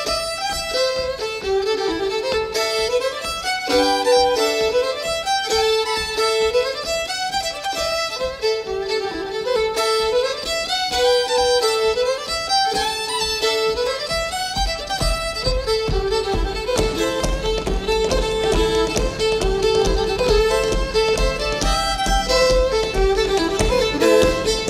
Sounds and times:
Violin, fiddle: 0.0s - 24.6s.

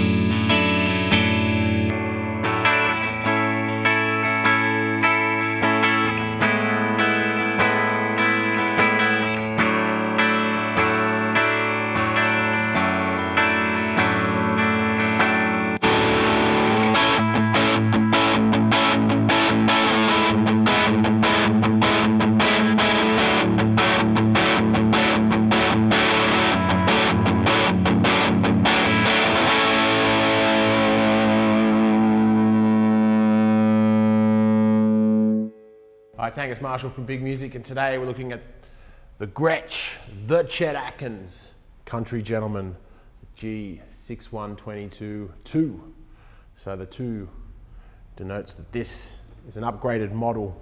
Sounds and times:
Music: 0.0s - 36.2s.

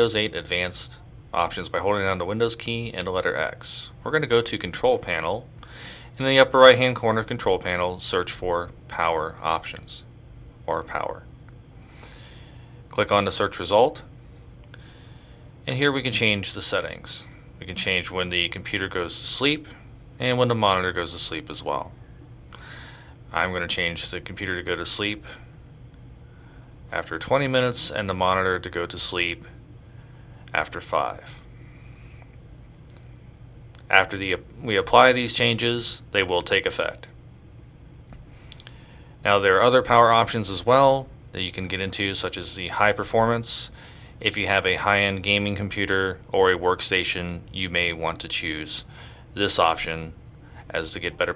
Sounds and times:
Speech: 0.0s - 5.5s, 6.2s - 10.1s, 10.7s - 11.3s, 12.9s - 14.1s, 15.6s - 22.0s, 23.3s - 25.4s, 26.9s - 29.6s, 30.5s - 31.4s, 33.8s - 37.2s, 39.2s - 51.3s.

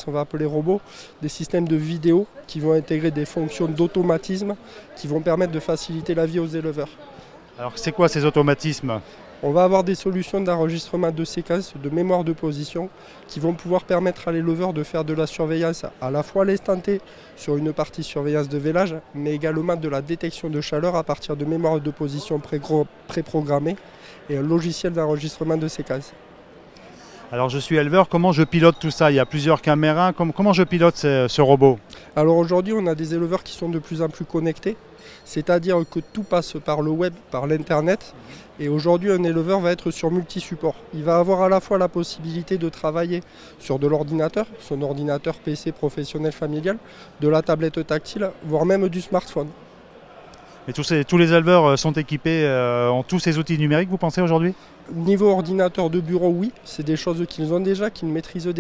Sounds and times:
Speech: 0.0s - 26.2s, 26.8s - 58.6s.

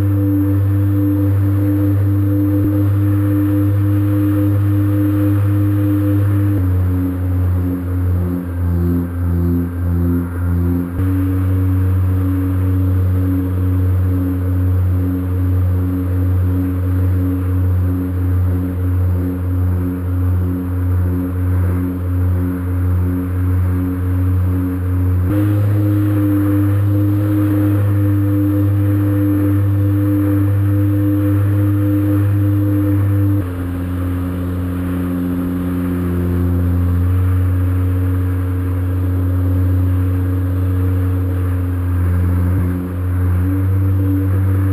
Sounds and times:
Ocean: 0.0s - 44.7s.

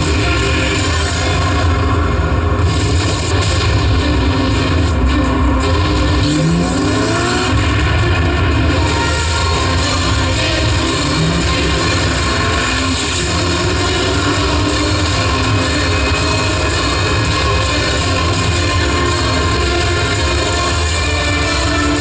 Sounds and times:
Race car, auto racing: 0.0s - 22.0s.

